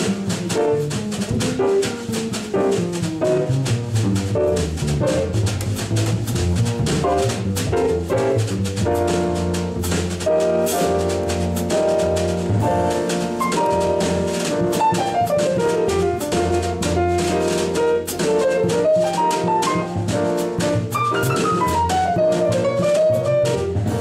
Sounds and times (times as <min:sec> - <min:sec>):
Double bass: 0:00.0 - 0:24.0
Drum: 0:00.0 - 0:24.0
Drum kit: 0:00.0 - 0:24.0
Jazz: 0:00.0 - 0:24.0
Piano: 0:00.0 - 0:24.0.